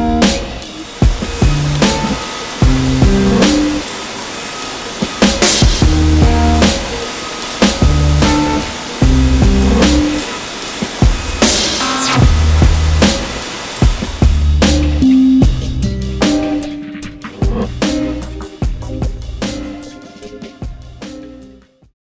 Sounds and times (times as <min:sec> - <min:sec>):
Music: 0:00.0 - 0:03.9, 0:05.0 - 0:10.3, 0:11.0 - 0:22.0.